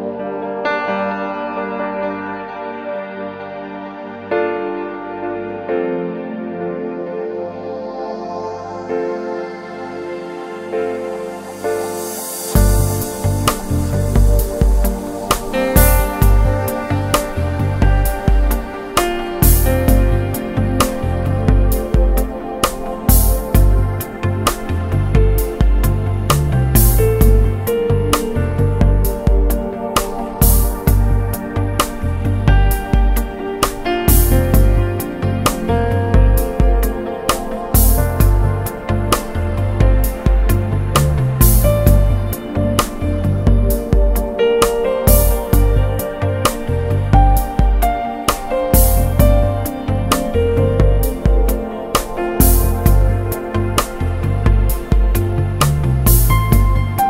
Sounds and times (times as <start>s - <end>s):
Trance music: 0.0s - 57.0s.